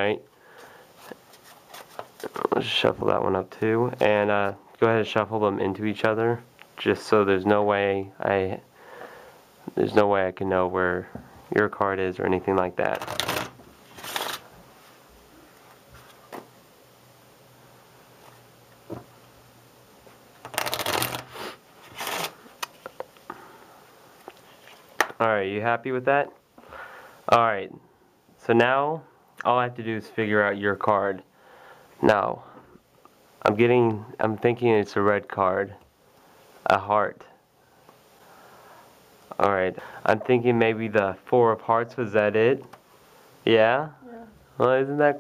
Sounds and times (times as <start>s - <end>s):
Shuffling cards: 1.0s - 2.5s, 12.8s - 14.5s, 20.4s - 23.1s
Speech: 2.2s - 8.7s, 9.7s - 13.0s, 28.4s - 31.3s, 33.4s - 35.8s, 39.3s - 42.6s, 43.5s - 45.2s.